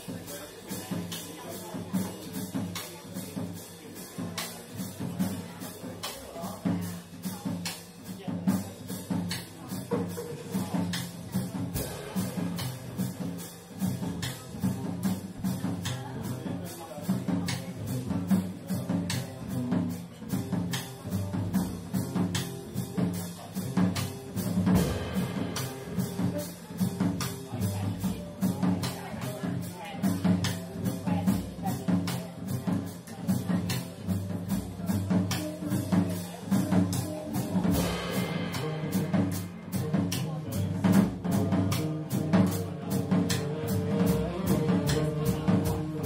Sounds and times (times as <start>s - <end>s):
Jazz: 0.0s - 46.0s.